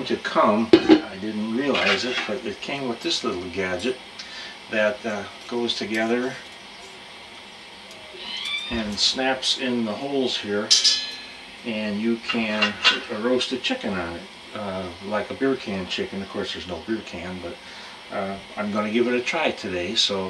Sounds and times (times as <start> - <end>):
Speech: 0.0 - 6.4, 8.7 - 10.9, 11.7 - 20.3.